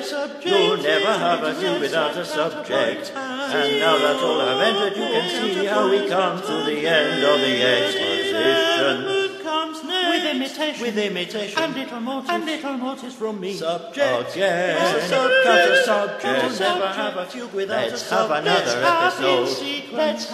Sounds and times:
Choir: 0:00.0 - 0:20.3.

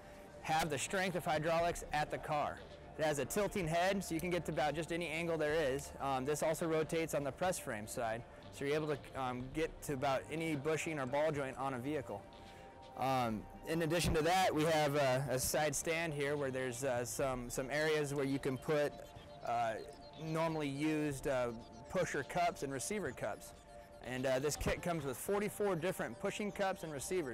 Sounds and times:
Music: 0:00.0 - 0:27.3
Speech: 0:00.4 - 0:12.2, 0:13.0 - 0:27.3.

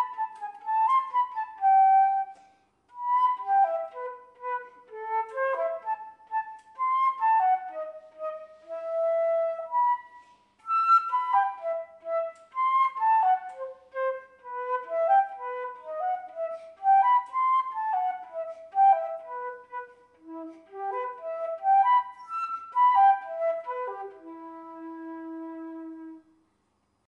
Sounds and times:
Music: 0:00.0 - 0:26.6.

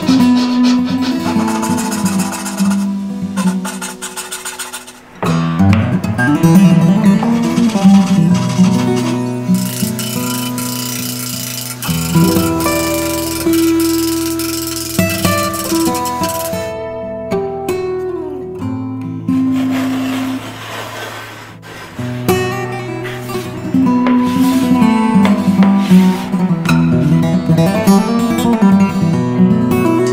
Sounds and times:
Music: 0:00.0 - 0:30.1.

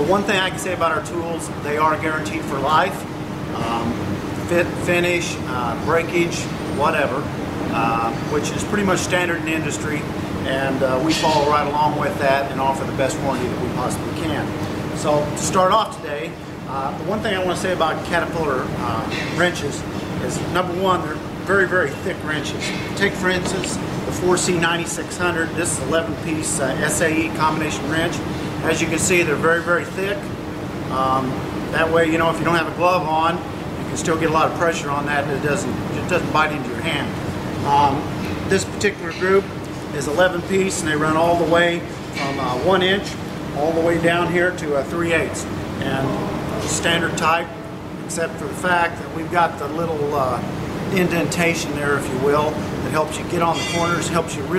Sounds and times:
Speech: 0:00.0 - 0:30.3, 0:30.9 - 0:54.5.

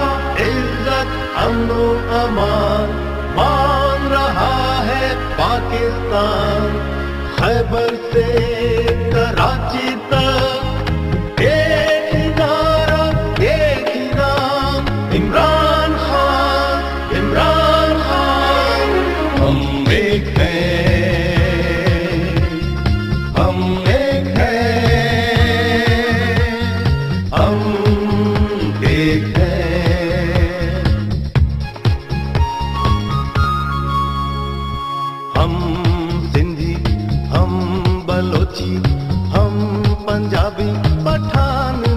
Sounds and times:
Music: 0:00.0 - 0:41.9.

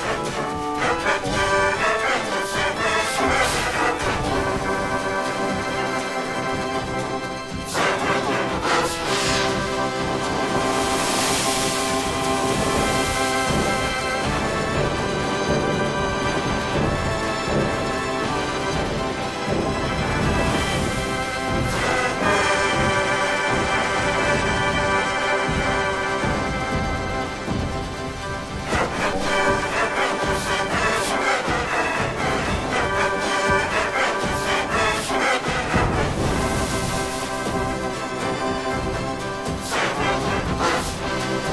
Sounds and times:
Music: 0:00.0 - 0:41.5.

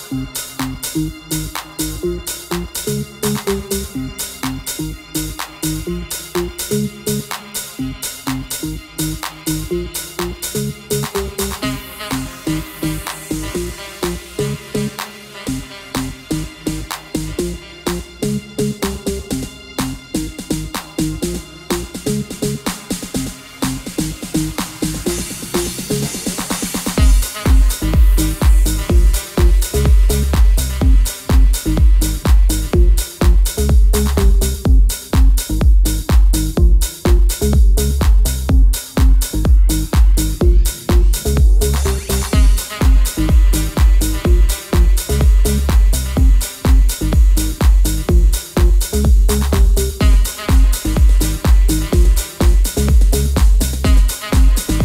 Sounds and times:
Electronica: 0:00.0 - 0:54.8.

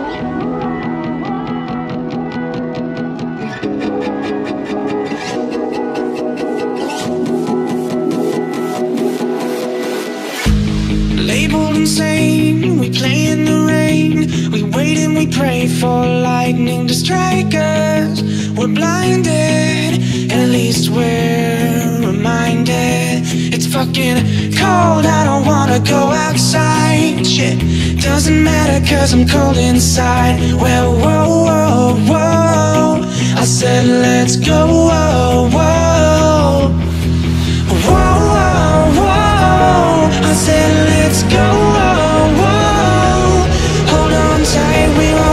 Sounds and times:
Electronica: 0:00.0 - 0:13.9, 0:35.7 - 0:45.3.

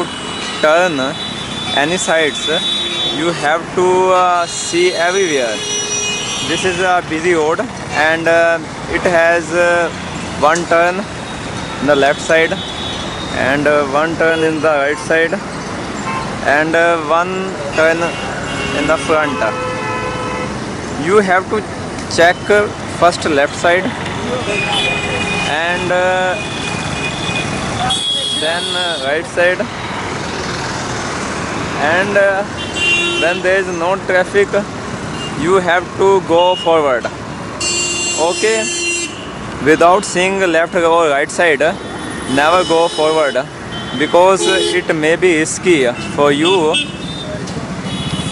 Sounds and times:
Speech: 0:00.0 - 0:01.2, 0:01.8 - 0:05.6, 0:06.5 - 0:11.1, 0:11.8 - 0:12.6, 0:13.4 - 0:15.4, 0:16.4 - 0:18.2, 0:18.8 - 0:19.6, 0:21.0 - 0:26.4, 0:28.4 - 0:29.7, 0:31.8 - 0:32.5, 0:33.2 - 0:34.7, 0:35.4 - 0:37.1, 0:39.6 - 0:47.4
Traffic noise, roadway noise: 0:00.0 - 0:48.3.

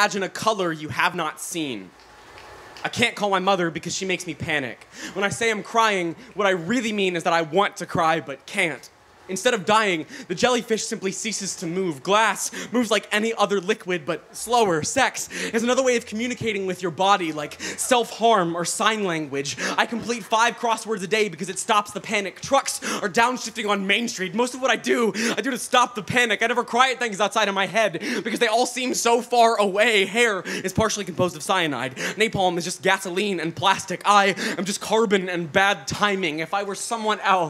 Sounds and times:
Speech: 0:00.0 - 0:02.0, 0:02.8 - 0:37.5.

